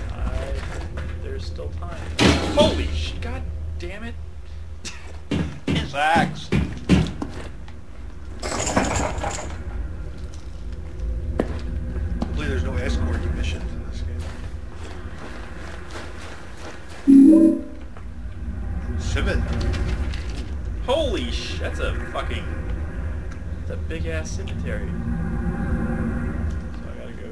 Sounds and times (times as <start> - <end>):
Speech: 5.7 - 6.6.